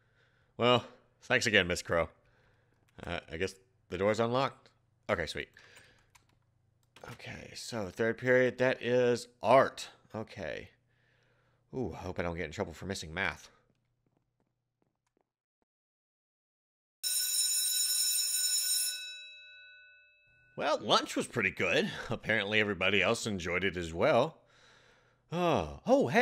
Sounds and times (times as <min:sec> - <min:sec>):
Inside, small room: 0:00.0 - 0:15.3
Speech: 0:00.6 - 0:02.2, 0:03.0 - 0:05.5, 0:07.0 - 0:10.8, 0:11.7 - 0:13.6, 0:20.6 - 0:24.4, 0:25.3 - 0:26.2.